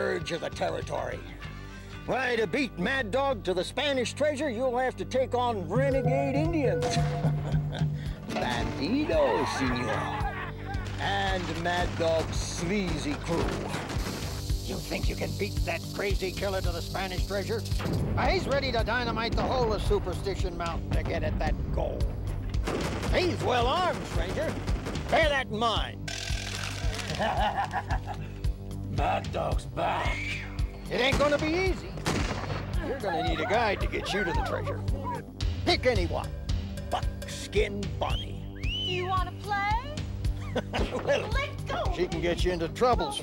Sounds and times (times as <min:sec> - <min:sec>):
Music: 0:00.0 - 0:43.2.